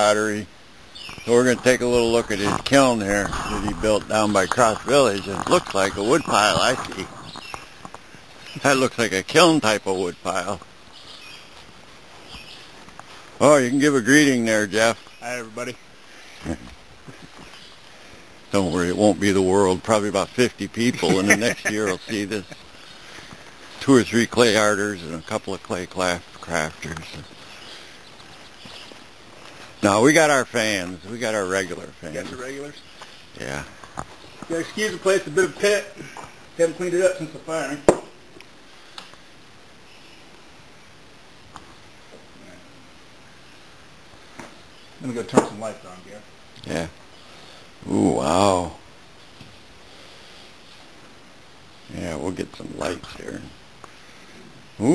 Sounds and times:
Speech: 0:00.0 - 0:00.5, 0:01.3 - 0:07.1, 0:08.6 - 0:10.6, 0:13.4 - 0:15.8, 0:18.5 - 0:22.6, 0:23.8 - 0:27.3, 0:29.8 - 0:32.8, 0:34.5 - 0:37.9, 0:45.0 - 0:47.0, 0:47.8 - 0:48.8, 0:51.9 - 0:53.6.

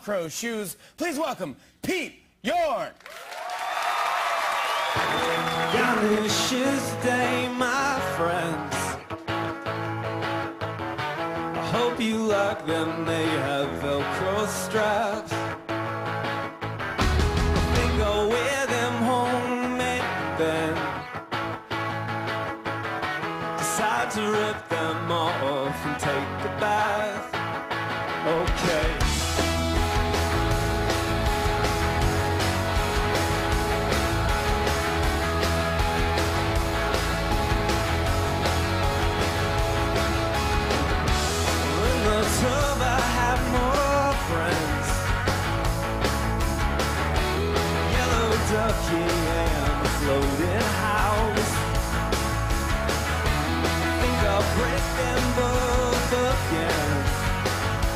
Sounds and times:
Music: 0:04.8 - 0:57.9.

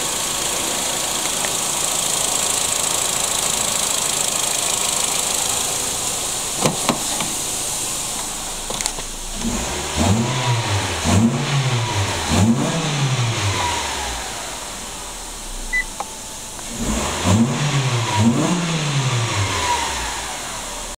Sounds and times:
Car: 0:00.0 - 0:20.9
Idling: 0:00.0 - 0:20.9
Medium engine (mid frequency): 0:00.0 - 0:20.9
Accelerating, revving, vroom: 0:09.4 - 0:14.2, 0:16.8 - 0:20.6.

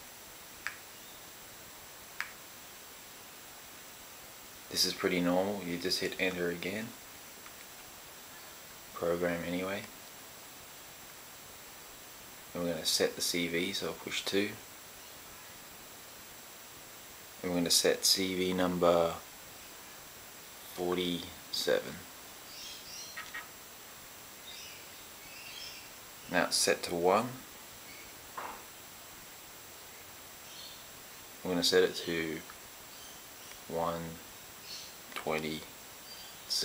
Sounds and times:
Speech: 0:04.7 - 0:07.0, 0:09.0 - 0:09.9, 0:12.5 - 0:14.6, 0:17.4 - 0:19.3, 0:20.7 - 0:22.1, 0:26.3 - 0:27.5, 0:31.4 - 0:32.5, 0:33.7 - 0:34.2, 0:35.2 - 0:35.7.

